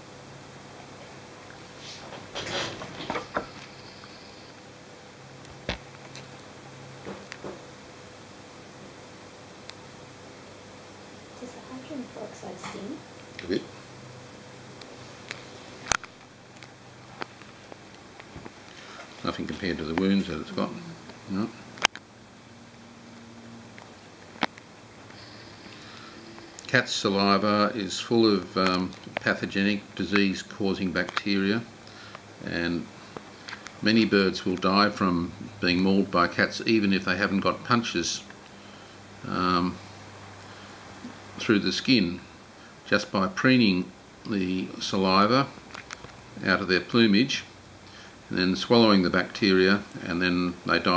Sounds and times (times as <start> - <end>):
Speech: 11.4 - 13.7, 19.2 - 21.6, 26.7 - 31.7, 32.4 - 32.9, 33.8 - 38.2, 39.2 - 39.8, 41.4 - 42.3, 42.9 - 45.6, 46.4 - 47.5, 48.3 - 50.9.